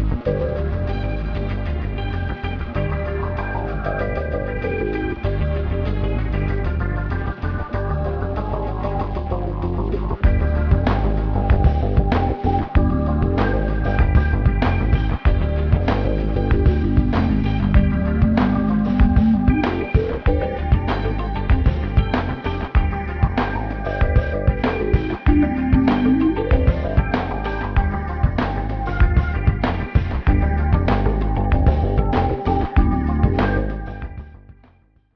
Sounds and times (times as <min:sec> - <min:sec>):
Music: 0:00.0 - 0:35.1.